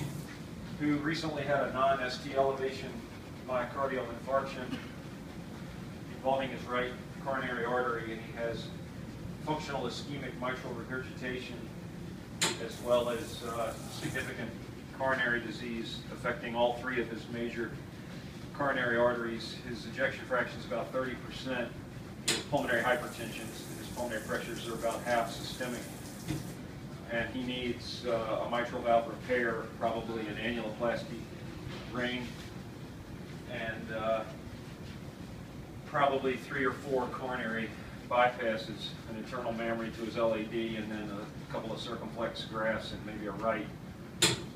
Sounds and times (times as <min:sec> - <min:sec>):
Speech: 0:00.8 - 0:05.0, 0:06.2 - 0:08.8, 0:09.4 - 0:11.7, 0:12.4 - 0:17.8, 0:18.5 - 0:25.9, 0:27.0 - 0:32.4, 0:33.5 - 0:34.4, 0:35.9 - 0:43.8.